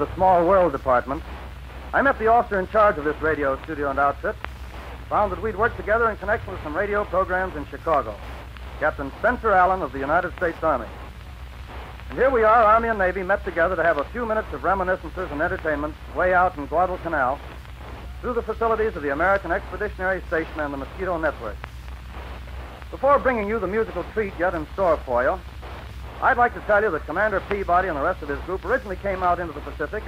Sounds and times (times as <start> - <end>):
Speech: 0.0 - 1.3, 1.9 - 4.4, 5.0 - 8.2, 8.8 - 11.0, 12.1 - 17.5, 18.2 - 21.6, 22.9 - 25.4, 26.2 - 30.0.